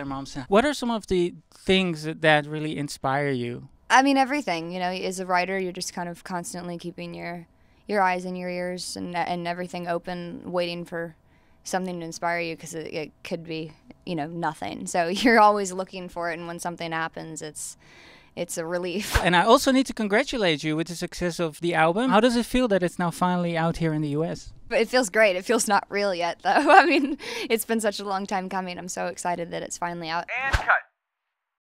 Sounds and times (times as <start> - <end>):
Speech: 0.0 - 4.9, 28.0 - 30.8.